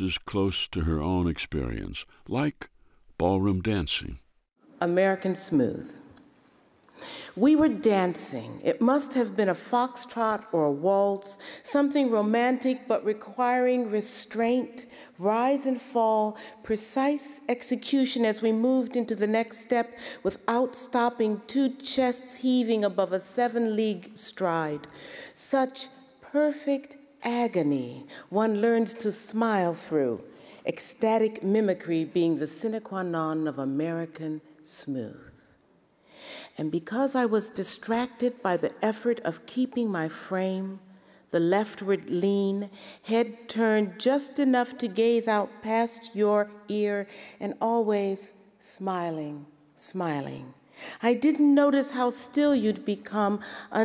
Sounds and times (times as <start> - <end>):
Speech: 0.0 - 4.2, 4.8 - 6.1, 7.3 - 35.4, 36.6 - 40.8, 41.4 - 53.8.